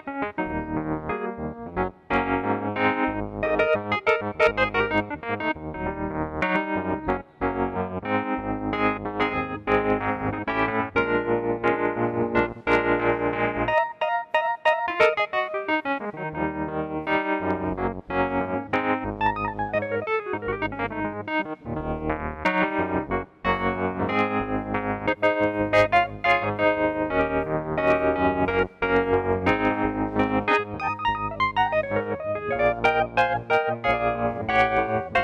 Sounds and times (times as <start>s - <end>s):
Electric piano: 0.0s - 35.2s.